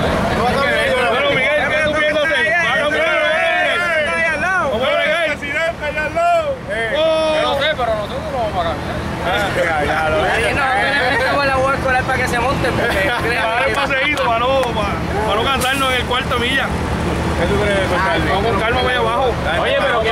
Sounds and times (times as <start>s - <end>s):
Speech: 0.0s - 20.1s
Vehicle: 0.0s - 20.1s.